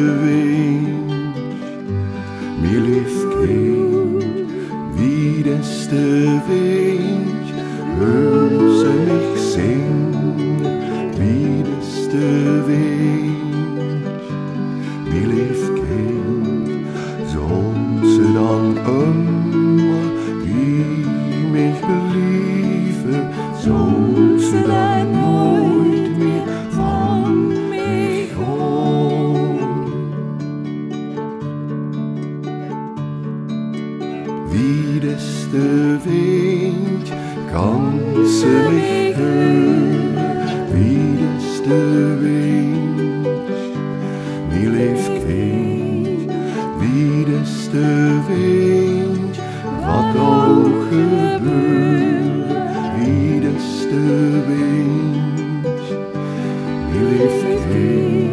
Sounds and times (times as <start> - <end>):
Music: 0.0 - 58.3.